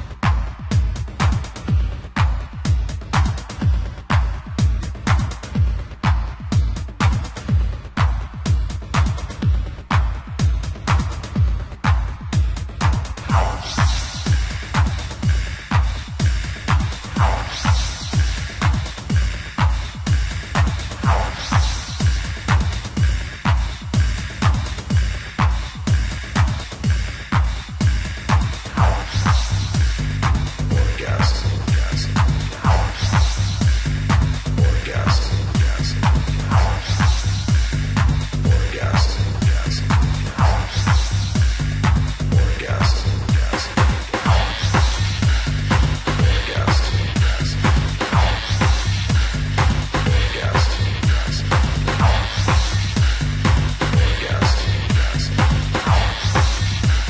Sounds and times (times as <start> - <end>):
Music: 0.0 - 57.0.